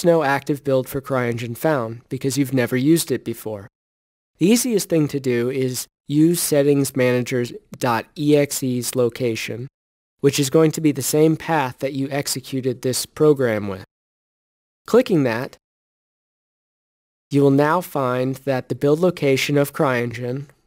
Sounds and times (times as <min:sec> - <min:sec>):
Speech: 0:00.0 - 0:03.7, 0:04.4 - 0:13.9, 0:14.9 - 0:15.6, 0:17.3 - 0:20.6.